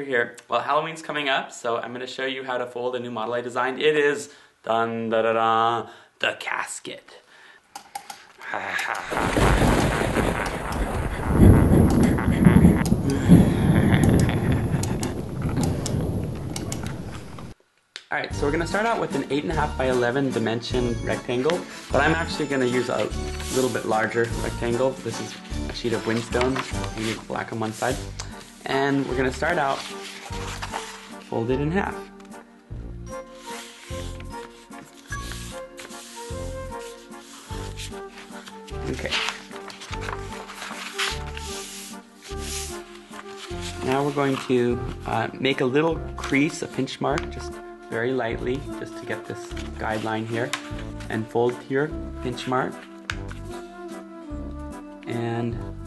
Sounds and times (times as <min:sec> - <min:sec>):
Speech: 0:00.0 - 0:07.3, 0:18.1 - 0:29.8, 0:31.3 - 0:32.0, 0:38.8 - 0:39.3, 0:43.8 - 0:50.5, 0:51.1 - 0:52.8, 0:55.1 - 0:55.7
Music: 0:18.3 - 0:55.8.